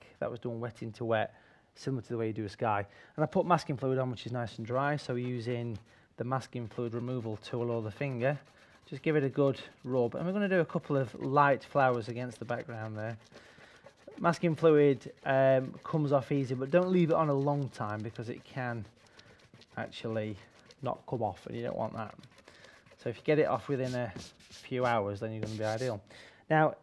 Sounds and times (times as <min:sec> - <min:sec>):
Speech: 0:00.0 - 0:13.2, 0:14.2 - 0:18.9, 0:19.8 - 0:22.2, 0:23.0 - 0:26.8.